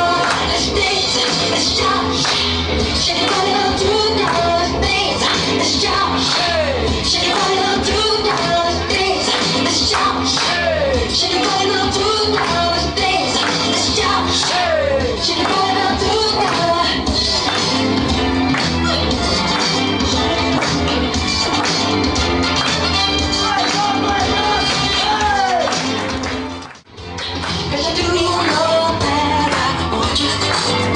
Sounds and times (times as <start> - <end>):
Music: 0.0 - 30.9.